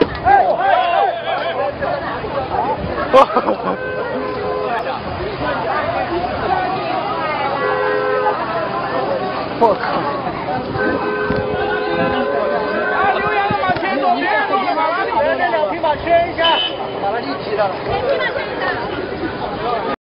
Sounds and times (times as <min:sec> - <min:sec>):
Speech: 0:00.0 - 0:11.0, 0:11.6 - 0:20.0.